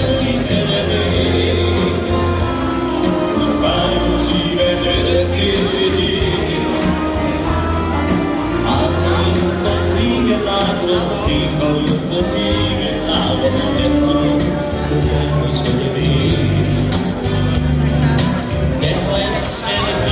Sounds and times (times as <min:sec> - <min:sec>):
Background music: 0:00.0 - 0:20.1
Soundtrack music: 0:00.0 - 0:20.1.